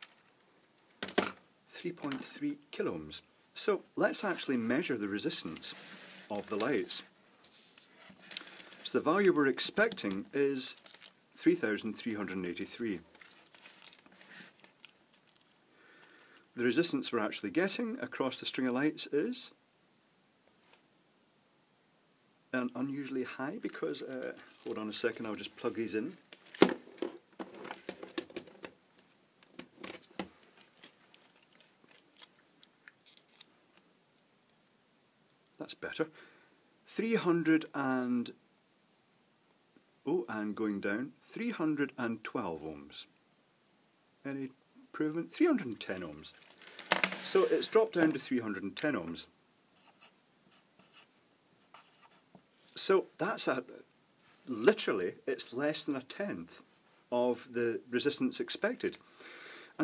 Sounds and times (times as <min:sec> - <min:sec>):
Inside, small room: 0:00.0 - 0:59.8
Speech: 0:01.7 - 0:07.1, 0:08.9 - 0:10.8, 0:11.4 - 0:13.1, 0:16.6 - 0:19.6, 0:22.5 - 0:26.2, 0:35.6 - 0:36.1, 0:36.9 - 0:38.4, 0:40.1 - 0:43.1, 0:44.2 - 0:46.4, 0:47.3 - 0:49.3, 0:52.8 - 0:53.9, 0:54.5 - 0:59.0
Writing: 0:49.8 - 0:52.4.